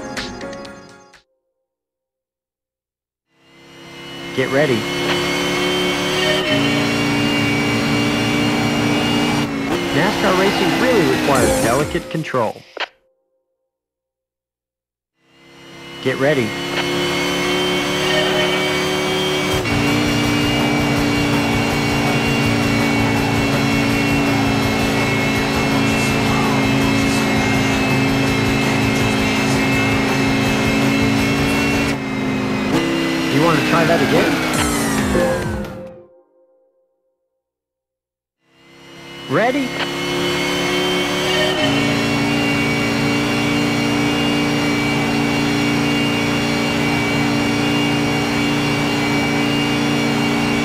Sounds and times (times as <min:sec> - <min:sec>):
Race car, auto racing: 0:03.3 - 0:12.9, 0:15.2 - 0:35.8, 0:38.4 - 0:50.6
Speech: 0:04.4 - 0:04.9, 0:09.9 - 0:12.6, 0:16.0 - 0:16.6, 0:33.3 - 0:34.4, 0:39.3 - 0:39.8.